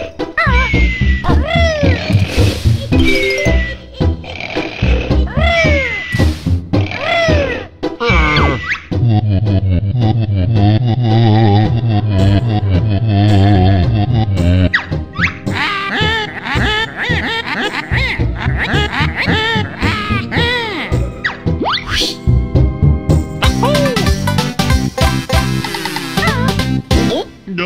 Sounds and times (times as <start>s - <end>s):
Music: 0.0s - 27.6s.